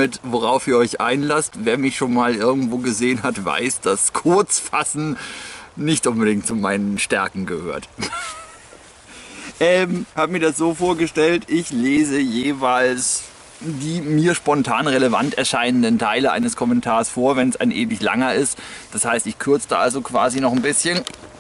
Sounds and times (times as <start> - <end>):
Speech: 0.0 - 5.2, 5.8 - 8.0, 9.6 - 21.1
Outside, rural or natural: 0.0 - 21.4.